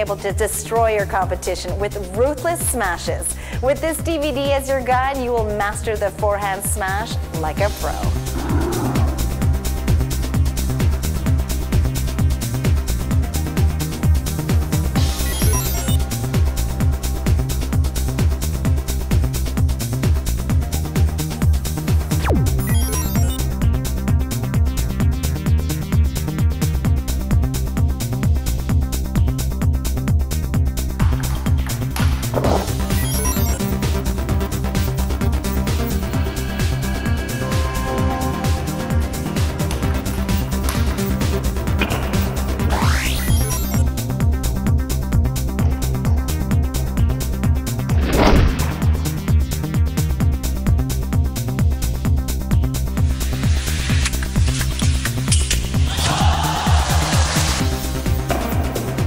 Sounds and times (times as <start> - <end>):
Music: 0.0 - 59.0.